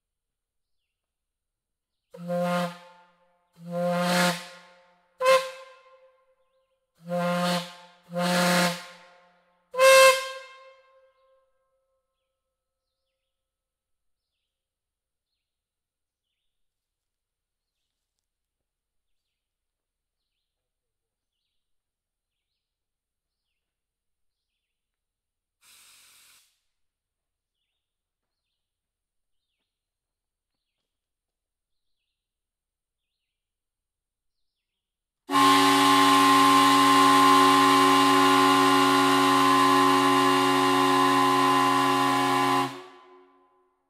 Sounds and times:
Steam whistle: 2.2s - 6.1s, 7.0s - 9.2s, 9.8s - 10.8s, 35.3s - 43.4s.

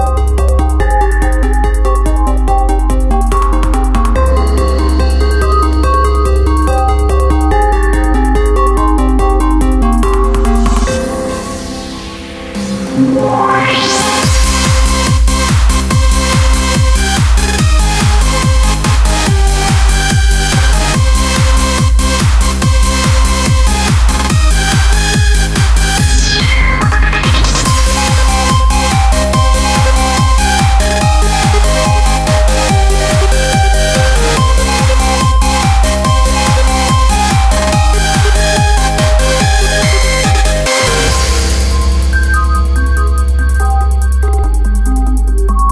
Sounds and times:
Techno: 0.0s - 45.7s.

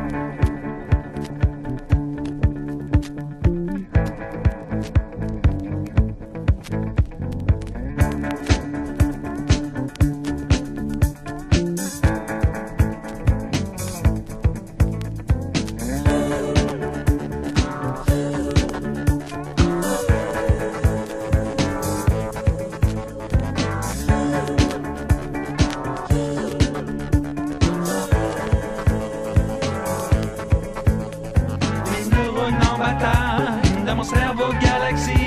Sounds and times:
Music: 0.0s - 35.2s.

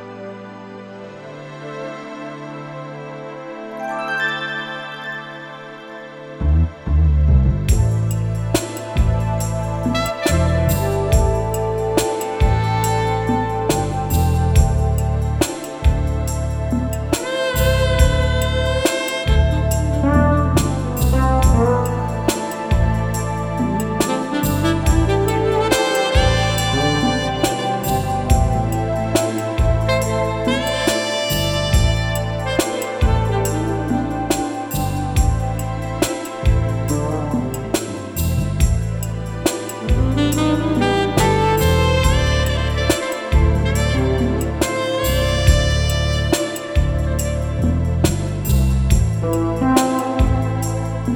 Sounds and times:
Music: 0.0s - 51.1s.

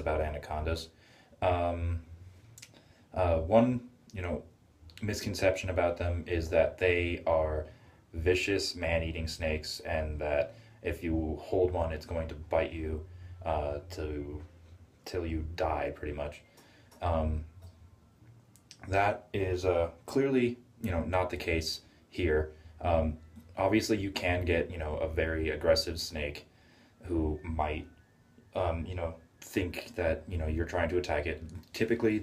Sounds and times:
Speech: 0.0s - 2.1s, 3.2s - 16.4s, 17.0s - 17.6s, 18.7s - 27.9s, 28.5s - 32.2s
Inside, small room: 0.0s - 32.2s.

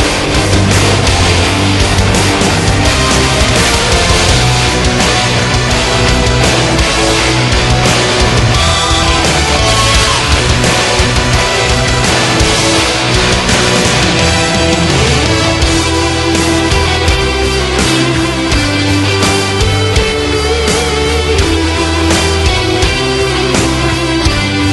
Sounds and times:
Music: 0.0s - 24.7s.

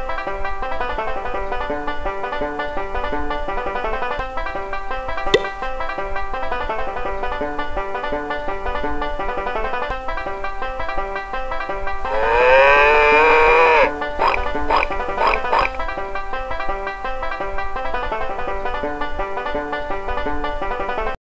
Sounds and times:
Music: 0.0s - 21.2s
Oink: 12.1s - 15.8s.

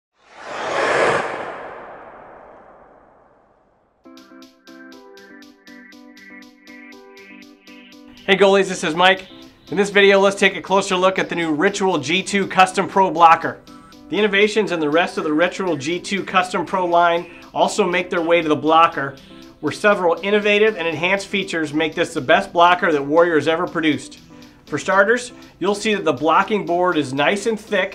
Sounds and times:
Music: 4.0s - 27.9s
Speech: 8.3s - 27.9s.

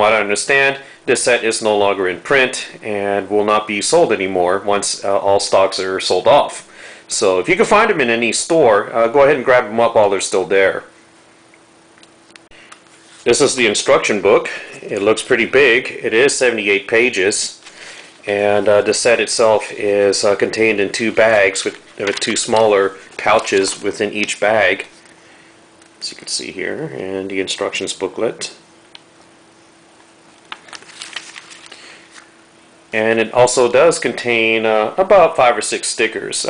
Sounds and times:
Speech: 0.0s - 10.9s, 13.2s - 17.6s, 18.2s - 25.0s, 26.0s - 28.6s, 32.9s - 36.4s.

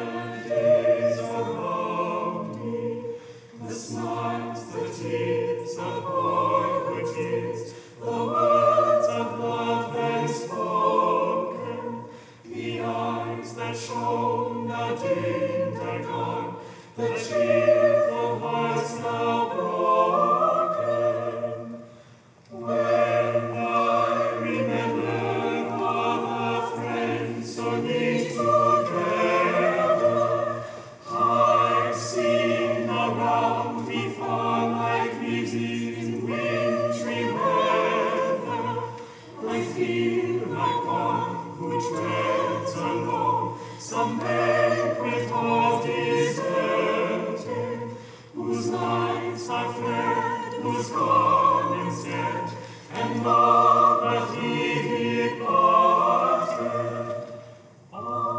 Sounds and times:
Choir: 0.0s - 58.3s
Opera: 0.0s - 58.3s.

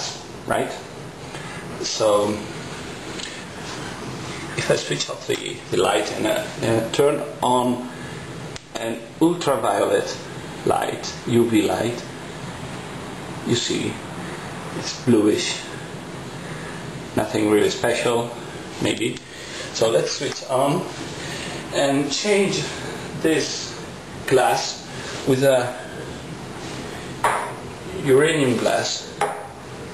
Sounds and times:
Speech: 0.0s - 0.9s, 1.8s - 2.5s, 4.6s - 8.0s, 8.7s - 12.1s, 13.4s - 14.1s, 14.8s - 15.8s, 17.2s - 21.0s, 21.7s - 26.0s, 27.9s - 29.2s.

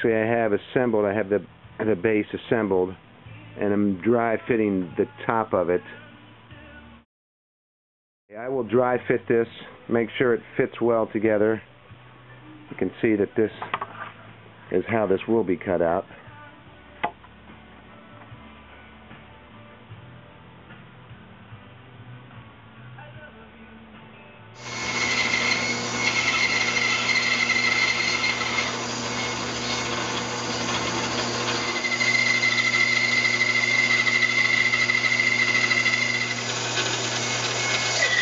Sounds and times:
Wood: 24.6s - 38.2s.

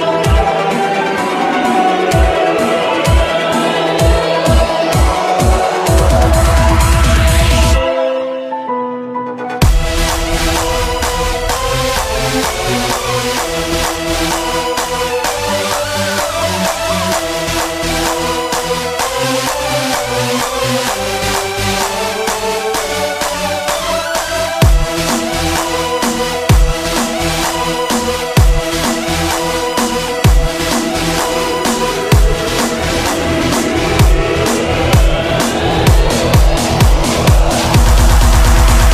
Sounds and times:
Electronic dance music: 0.0s - 8.3s, 9.6s - 38.9s.

